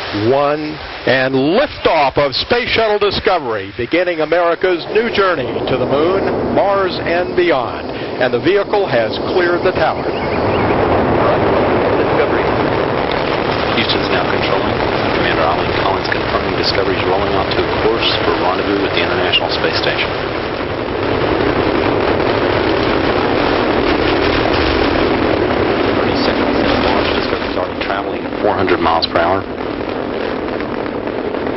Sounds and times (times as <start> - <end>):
Speech: 0.1 - 10.0, 11.2 - 12.5, 13.5 - 20.1, 26.0 - 29.5.